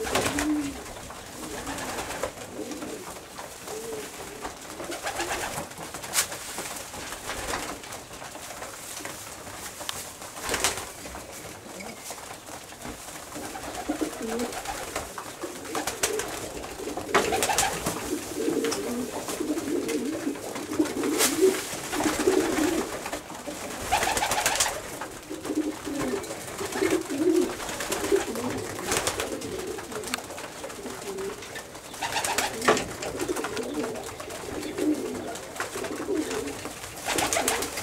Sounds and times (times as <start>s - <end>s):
Pigeon, dove: 0.0s - 37.8s.